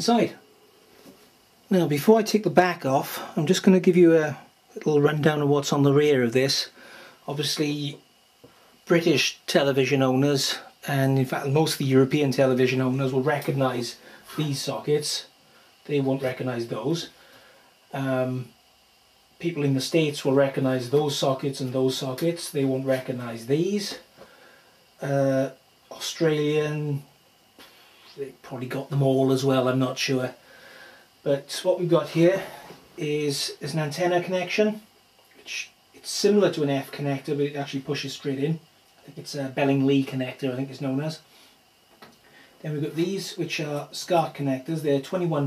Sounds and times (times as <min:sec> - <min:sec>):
Speech: 0:00.0 - 0:00.4, 0:01.7 - 0:08.0, 0:08.8 - 0:17.2, 0:17.9 - 0:18.6, 0:19.4 - 0:24.1, 0:25.0 - 0:27.1, 0:28.1 - 0:30.4, 0:31.2 - 0:41.3, 0:42.6 - 0:45.4.